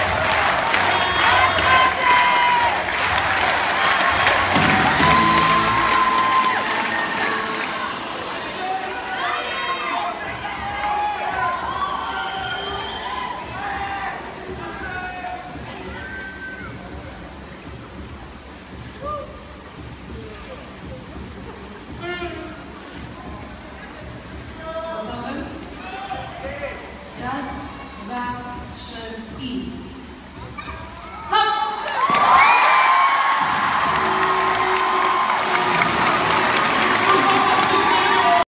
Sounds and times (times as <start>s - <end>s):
Music: 0.0s - 25.6s, 33.4s - 38.4s
Water: 0.0s - 38.4s.